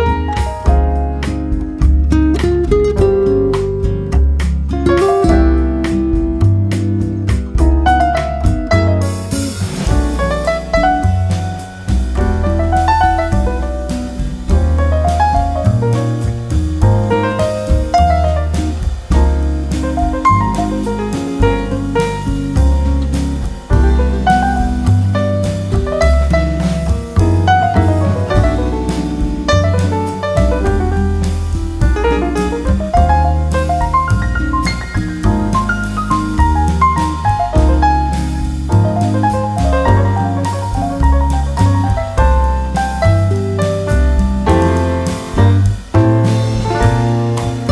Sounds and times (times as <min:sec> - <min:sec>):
Music: 0:00.0 - 0:47.7.